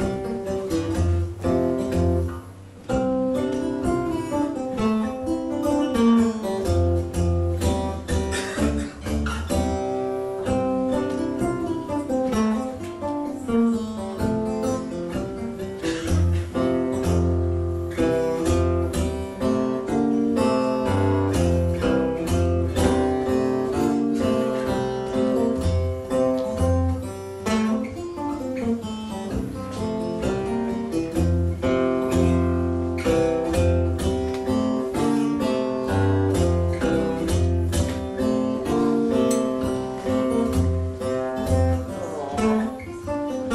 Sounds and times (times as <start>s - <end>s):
Guitar: 0.0s - 43.5s
Inside, large room or hall: 0.0s - 43.5s.